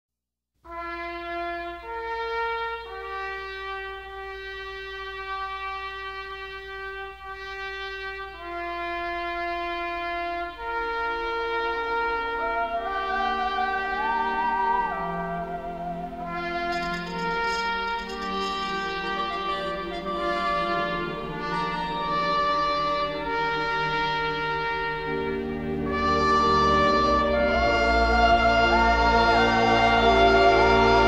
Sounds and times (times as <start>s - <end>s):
Trumpet: 0.7s - 31.0s.